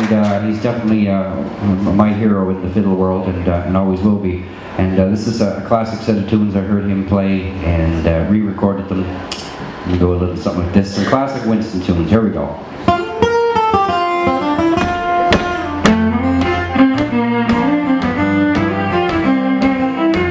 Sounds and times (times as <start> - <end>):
Speech: 0.0 - 9.2, 9.9 - 12.7
Music: 12.9 - 20.3.